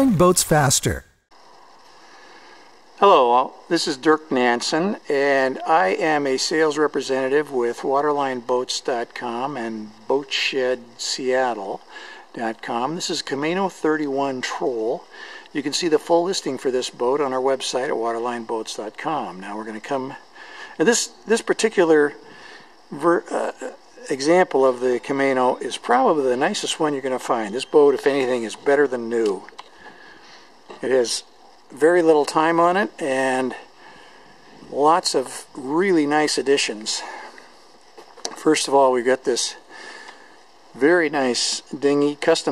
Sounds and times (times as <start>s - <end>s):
Speech: 0.0s - 1.1s, 3.0s - 11.8s, 12.4s - 20.2s, 20.8s - 22.2s, 22.9s - 29.5s, 30.8s - 33.7s, 34.6s - 37.3s, 38.4s - 39.6s, 40.8s - 42.5s.